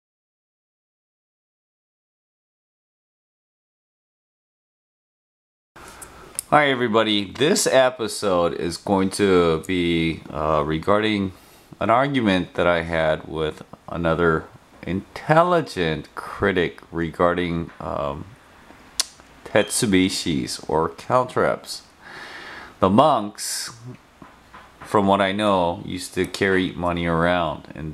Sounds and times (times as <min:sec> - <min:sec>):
Speech: 0:06.4 - 0:18.4, 0:19.4 - 0:21.9, 0:22.8 - 0:24.0, 0:24.9 - 0:27.9.